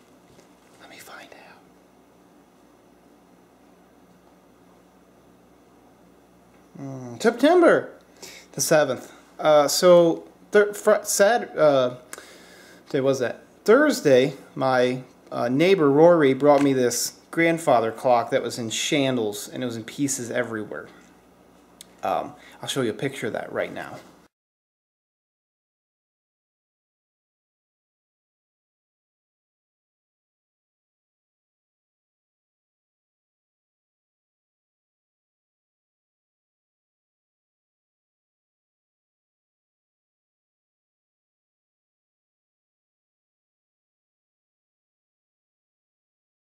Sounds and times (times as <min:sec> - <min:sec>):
Speech: 0:06.8 - 0:08.0, 0:08.6 - 0:12.1, 0:12.9 - 0:21.0, 0:22.0 - 0:24.1.